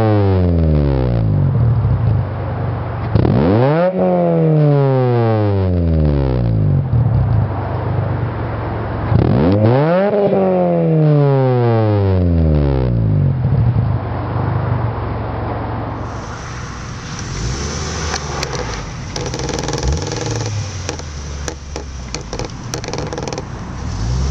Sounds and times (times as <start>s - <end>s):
Accelerating, revving, vroom: 0.0s - 1.4s, 3.1s - 6.8s, 9.0s - 13.3s, 15.9s - 21.6s, 22.9s - 24.3s
Car: 0.0s - 24.3s.